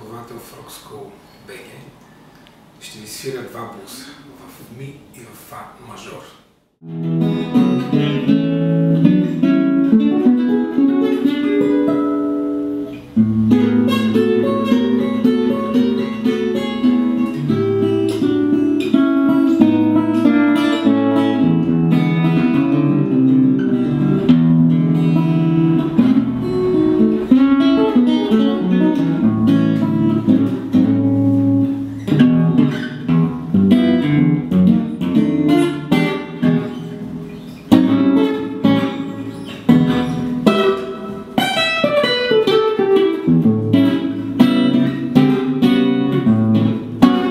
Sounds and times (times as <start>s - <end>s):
Acoustic guitar: 6.8s - 47.3s
Strum: 6.8s - 47.3s.